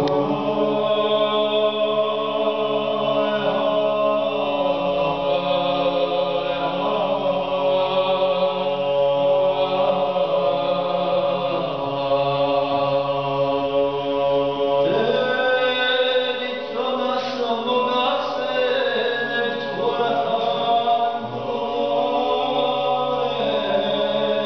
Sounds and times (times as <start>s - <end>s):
Male singing: 0.0s - 24.4s.